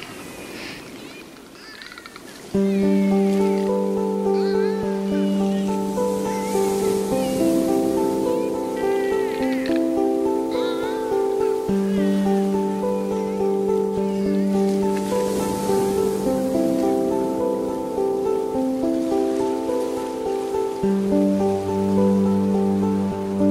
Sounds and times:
Music: 0:02.6 - 0:23.5.

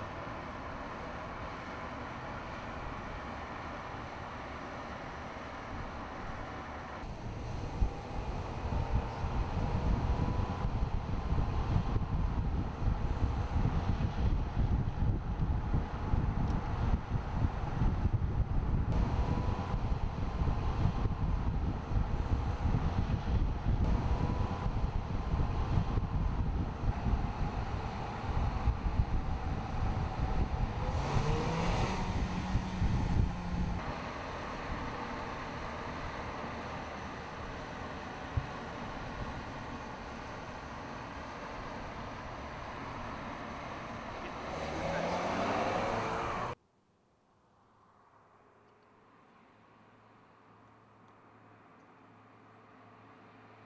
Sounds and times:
Car: 0:00.0 - 0:53.6.

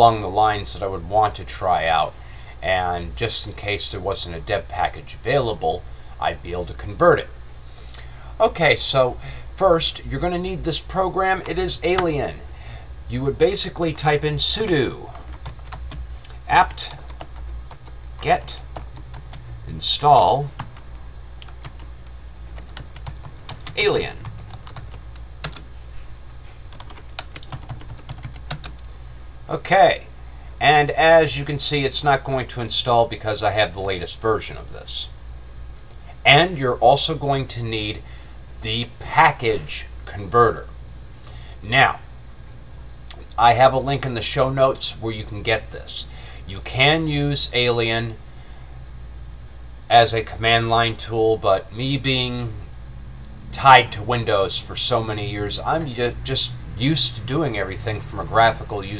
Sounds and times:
Speech: 0:00.0 - 0:07.4, 0:08.4 - 0:12.5, 0:13.1 - 0:15.3, 0:16.4 - 0:17.0, 0:18.2 - 0:18.7, 0:19.6 - 0:20.6, 0:23.7 - 0:24.2, 0:29.5 - 0:35.2, 0:36.2 - 0:38.0, 0:38.6 - 0:40.7, 0:41.6 - 0:42.1, 0:43.1 - 0:48.2, 0:49.9 - 0:52.7, 0:53.5 - 0:58.9.

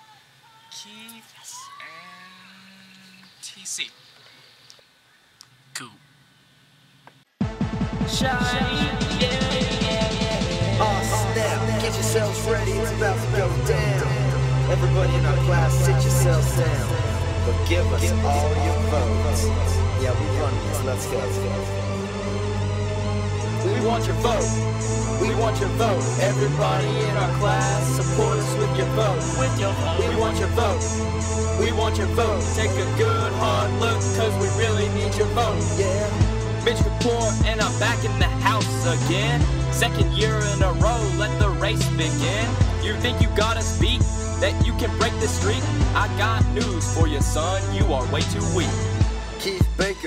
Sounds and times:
Speech: 0:00.5 - 0:02.2, 0:03.4 - 0:04.0, 0:05.8 - 0:06.0, 0:17.7 - 0:21.6
Music: 0:07.4 - 0:50.0.

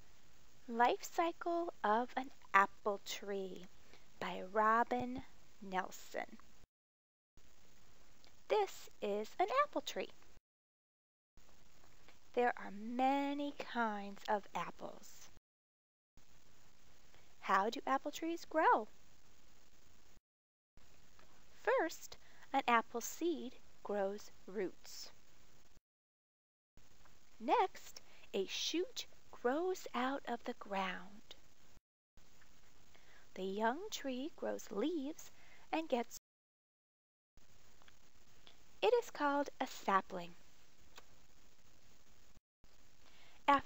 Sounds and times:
Speech: 0:00.7 - 0:06.4, 0:08.5 - 0:10.1, 0:12.3 - 0:15.3, 0:17.4 - 0:18.9, 0:21.6 - 0:25.2, 0:27.4 - 0:31.4, 0:33.4 - 0:36.2, 0:38.8 - 0:40.4.

